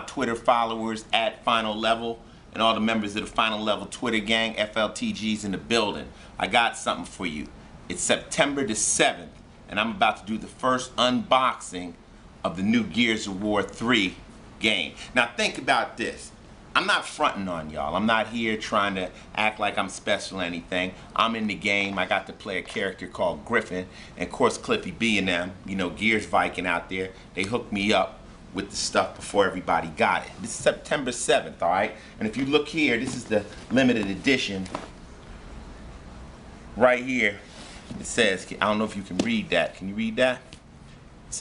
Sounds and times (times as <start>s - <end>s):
Speech: 0.0s - 34.9s, 36.8s - 40.6s.